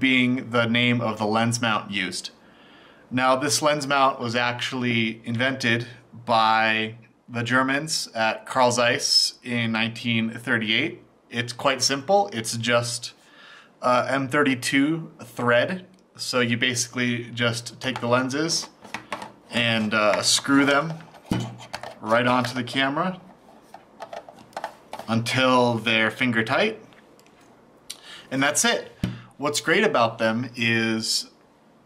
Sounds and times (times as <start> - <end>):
Speech: 0.0 - 2.4, 3.1 - 13.2, 13.8 - 18.8, 19.5 - 23.3, 25.1 - 26.9, 28.3 - 31.4.